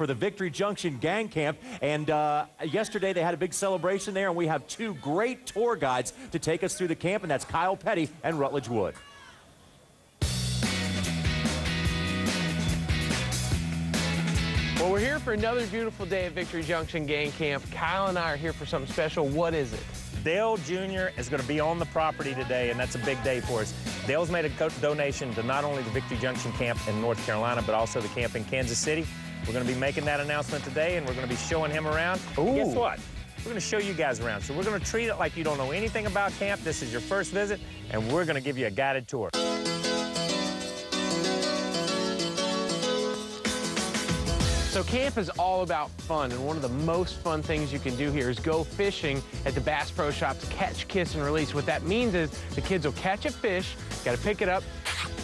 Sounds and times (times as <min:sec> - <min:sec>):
Speech: 0:00.0 - 0:09.4, 0:14.8 - 0:39.4, 0:44.7 - 0:54.6
Music: 0:10.2 - 0:55.2.